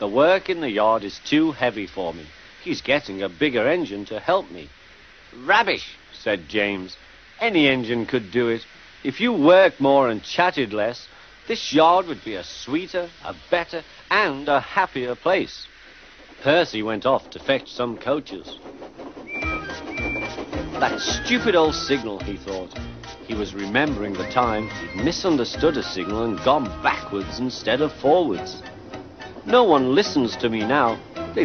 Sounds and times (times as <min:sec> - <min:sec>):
Speech: 0:00.0 - 0:04.7, 0:05.4 - 0:15.7, 0:16.4 - 0:18.6, 0:20.8 - 0:22.7, 0:23.3 - 0:28.6, 0:29.5 - 0:31.4.